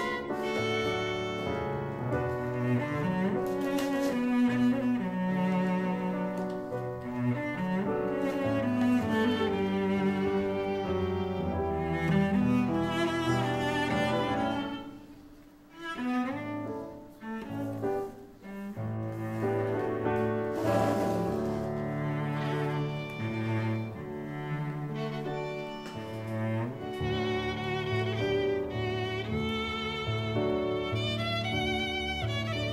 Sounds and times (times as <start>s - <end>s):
Music: 0.0s - 32.7s.